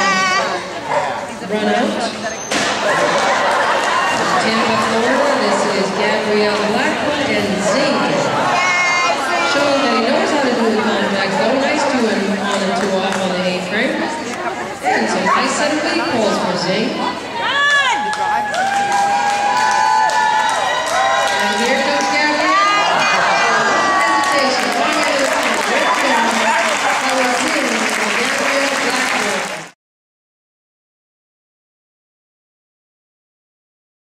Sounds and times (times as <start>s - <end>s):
Crowd: 0.0s - 29.8s
Cheering: 2.7s - 5.5s, 8.2s - 10.0s, 17.4s - 29.8s.